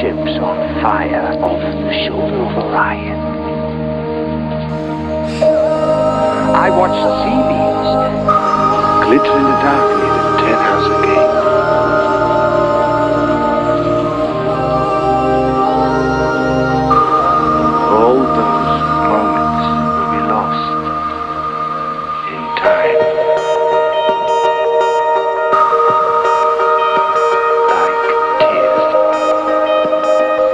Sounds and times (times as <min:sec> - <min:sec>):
Speech: 0:00.0 - 0:03.2, 0:06.6 - 0:08.0, 0:09.0 - 0:11.3, 0:17.9 - 0:20.7, 0:22.3 - 0:23.0
Music: 0:00.0 - 0:30.5.